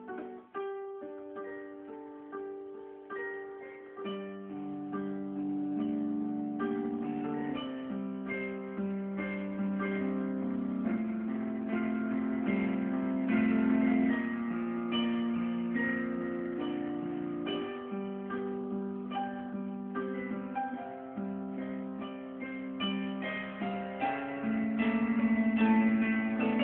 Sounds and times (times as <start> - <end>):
New-age music: 0.0 - 26.6.